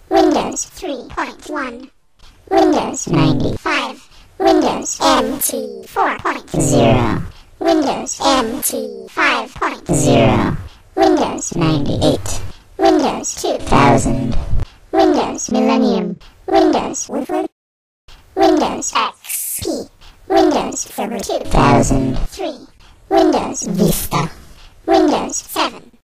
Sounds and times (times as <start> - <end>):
Speech synthesizer: 0.1 - 17.6, 18.4 - 26.0.